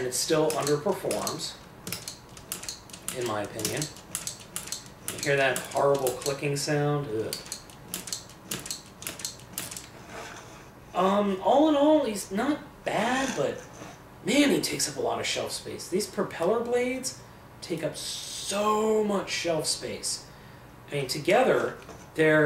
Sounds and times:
Speech: 0.0s - 1.6s, 3.1s - 3.9s, 5.2s - 7.4s, 11.0s - 20.3s, 20.9s - 22.4s
Inside, small room: 0.0s - 22.4s.

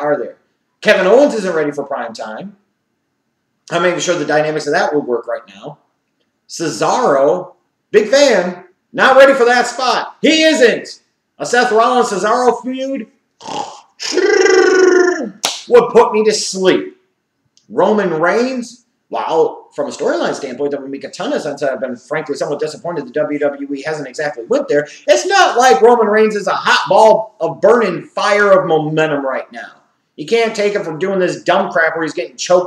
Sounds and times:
Speech: 0.0s - 2.6s, 3.7s - 5.8s, 6.5s - 13.2s, 14.2s - 17.0s, 17.7s - 32.6s
Inside, small room: 0.0s - 32.6s.

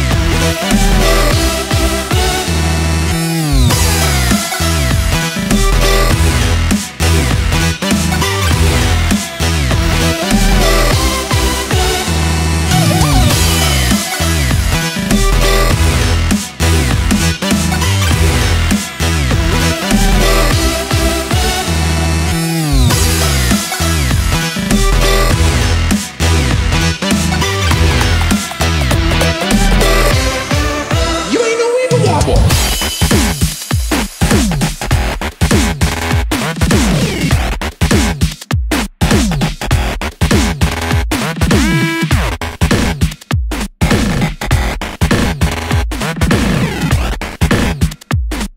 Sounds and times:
Dubstep: 0.0s - 48.5s.

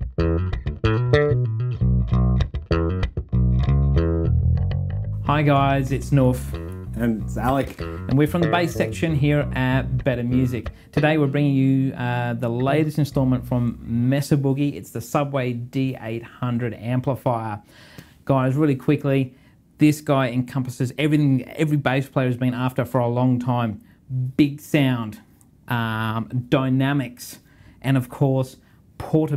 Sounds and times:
Speech: 5.3s - 17.6s, 18.3s - 29.3s.

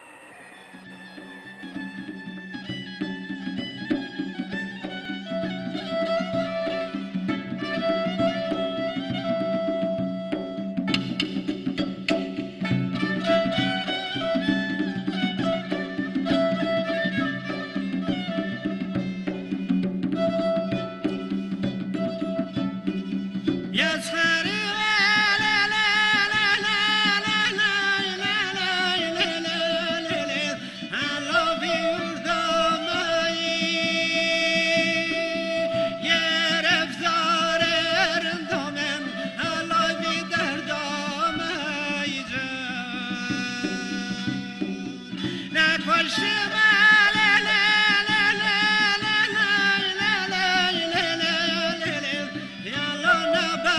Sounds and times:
Traditional music: 0.0s - 53.7s.

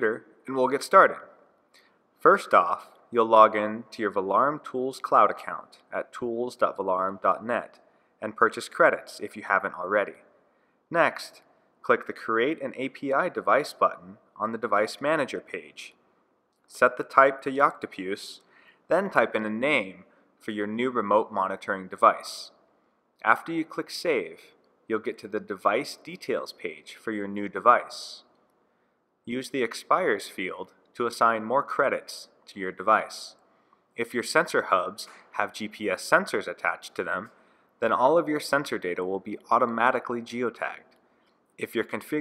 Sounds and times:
Speech: 0.0s - 1.3s, 2.2s - 10.3s, 10.9s - 16.0s, 16.7s - 22.6s, 23.2s - 28.3s, 29.3s - 33.4s, 34.0s - 40.9s, 41.6s - 42.2s.

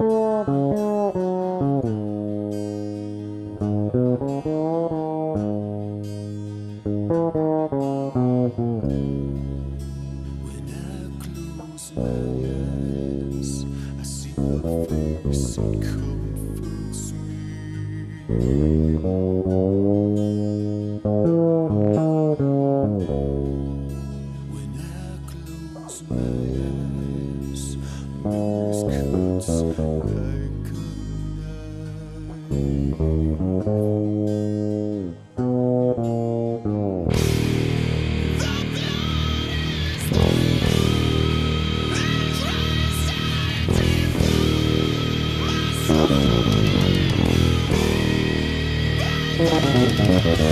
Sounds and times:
Bass guitar: 0.0s - 50.5s
Steel guitar, slide guitar: 0.0s - 50.5s.

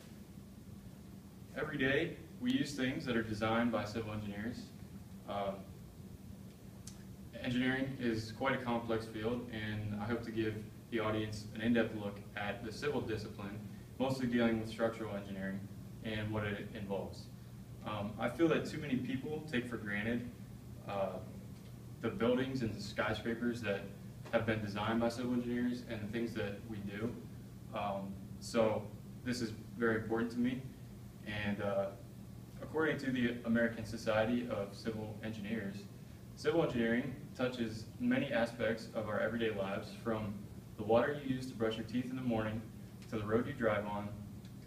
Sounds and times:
Narration, monologue: 0.0s - 44.6s
Male speech, man speaking: 1.6s - 5.7s, 7.4s - 21.3s, 22.0s - 30.7s, 31.3s - 32.0s, 32.6s - 44.3s.

